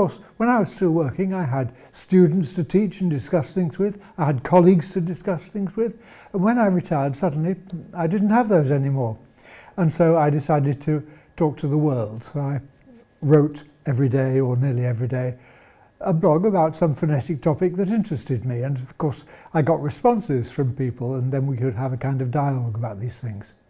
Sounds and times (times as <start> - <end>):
Speech: 0.0 - 9.2, 9.8 - 15.4, 16.0 - 23.6.